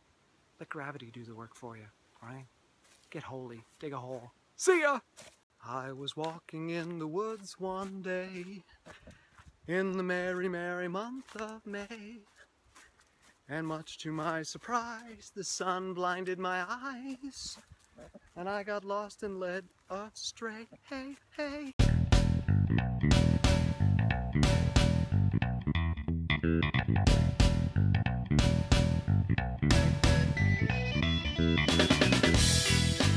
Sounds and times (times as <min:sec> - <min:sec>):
Outside, rural or natural: 0:00.0 - 0:33.1
Music: 0:21.8 - 0:33.1.